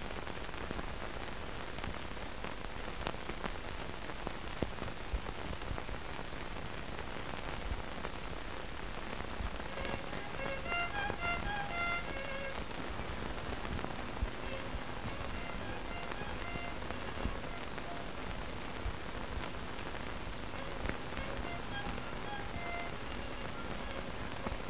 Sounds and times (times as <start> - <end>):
Violin, fiddle: 9.7 - 18.5, 20.5 - 24.6.